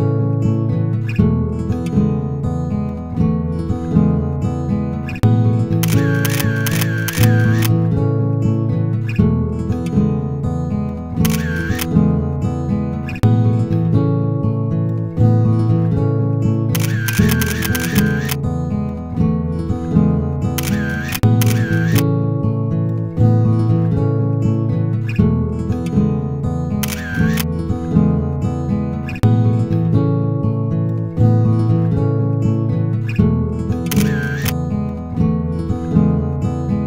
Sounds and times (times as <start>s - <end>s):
Music: 0.0s - 36.8s
Single-lens reflex camera: 5.8s - 7.7s, 11.2s - 11.9s, 16.7s - 18.4s, 20.6s - 22.0s, 26.8s - 27.5s, 33.9s - 34.6s.